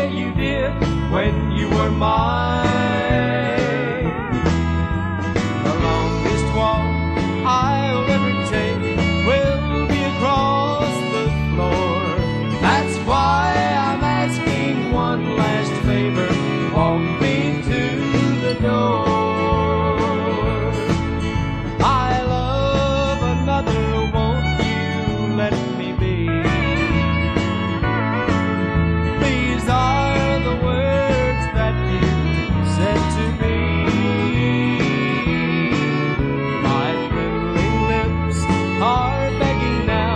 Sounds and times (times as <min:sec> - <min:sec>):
Music: 0:00.0 - 0:40.1.